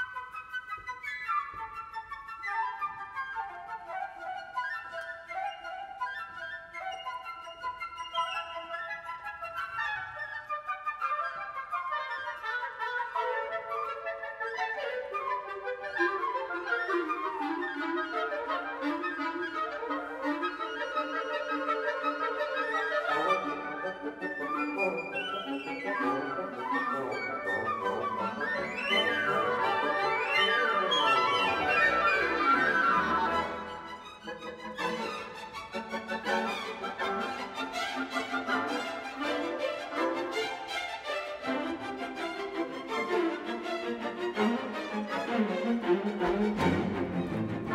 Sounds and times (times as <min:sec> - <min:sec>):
Music: 0:00.0 - 0:47.7.